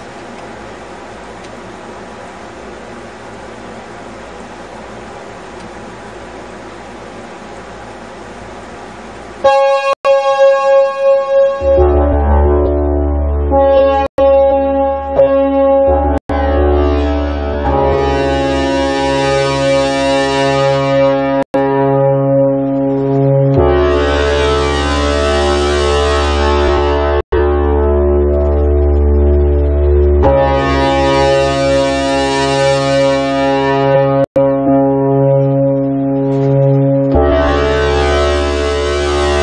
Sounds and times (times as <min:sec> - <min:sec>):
Music: 0:09.8 - 0:39.4.